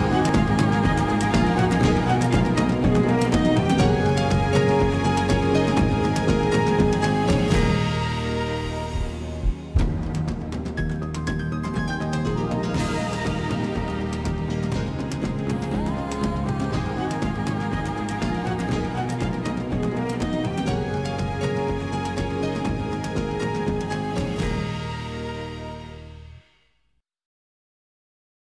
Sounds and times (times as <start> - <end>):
Music: 0.0 - 27.0.